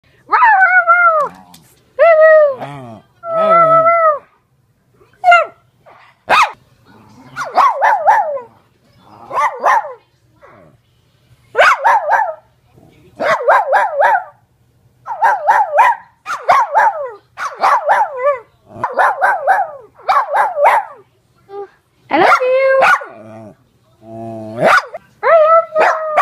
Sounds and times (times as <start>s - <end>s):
Bark: 6.3s - 6.6s, 7.4s - 8.5s, 9.3s - 10.0s, 11.6s - 12.5s, 13.2s - 14.4s, 15.1s - 21.0s, 22.2s - 23.2s, 24.6s - 25.0s, 25.8s - 26.2s
Bow-wow: 9.3s - 10.0s, 24.6s - 25.0s.